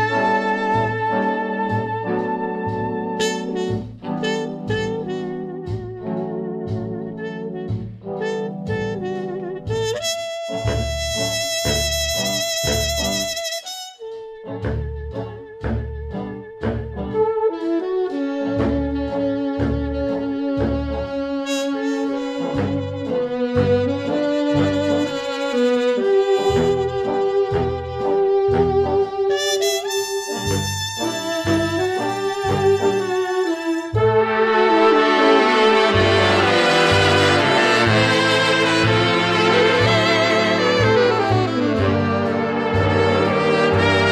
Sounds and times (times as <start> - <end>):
Saxophone: 0.0 - 44.1.